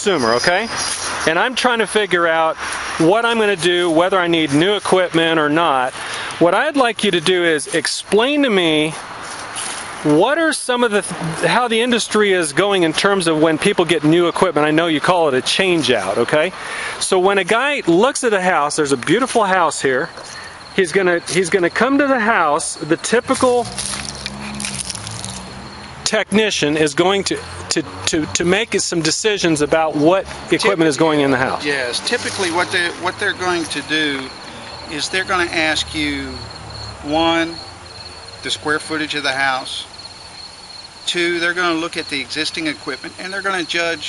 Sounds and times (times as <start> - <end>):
Speech: 0.0 - 0.7, 1.3 - 9.0, 10.0 - 20.1, 20.8 - 23.7, 26.1 - 34.3, 34.9 - 36.4, 37.0 - 37.6, 38.4 - 39.9, 41.1 - 44.0.